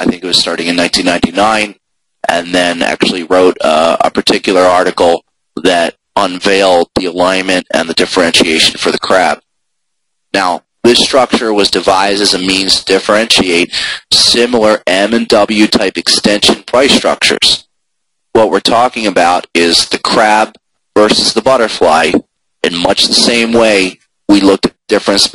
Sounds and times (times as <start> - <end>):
Speech: 0.0 - 9.4, 10.4 - 17.6, 18.4 - 25.3.